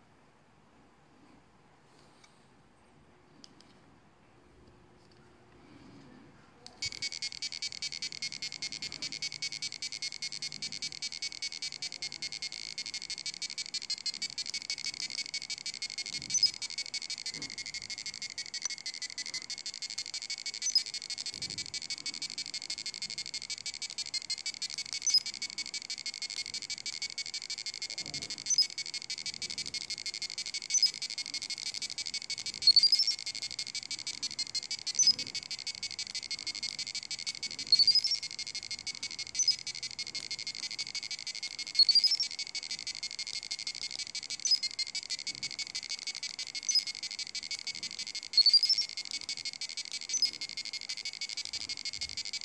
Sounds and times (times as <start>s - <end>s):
Inside, small room: 0.0s - 52.4s.